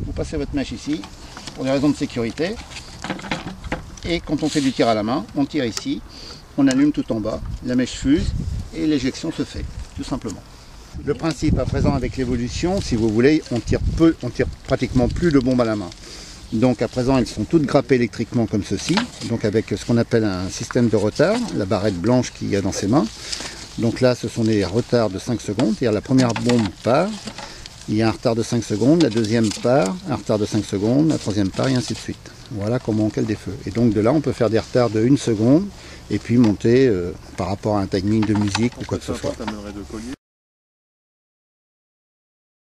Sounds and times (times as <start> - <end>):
Speech: 0.0 - 2.6, 4.0 - 6.0, 6.6 - 10.4, 11.0 - 23.2, 23.8 - 27.2, 27.9 - 40.2.